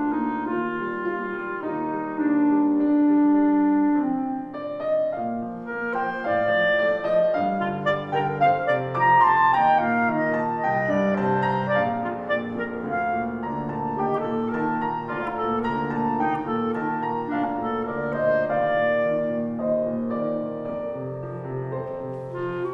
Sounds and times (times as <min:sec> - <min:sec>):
Clarinet: 0:00.0 - 0:22.7.